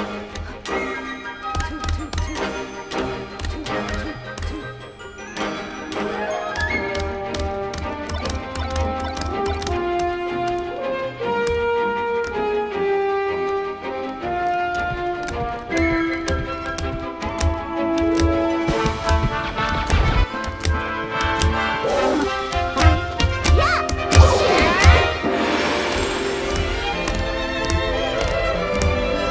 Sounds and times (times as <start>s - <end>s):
Music: 0.0s - 29.3s.